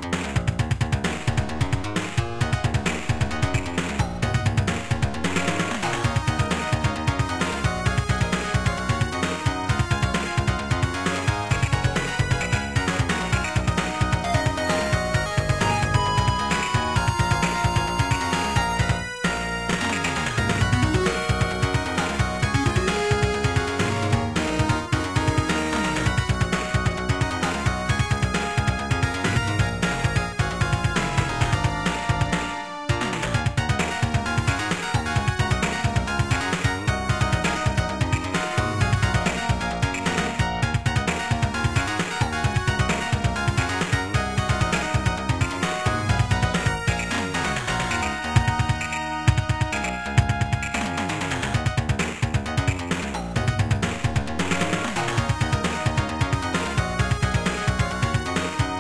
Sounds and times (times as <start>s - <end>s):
Video game music: 0.0s - 58.8s.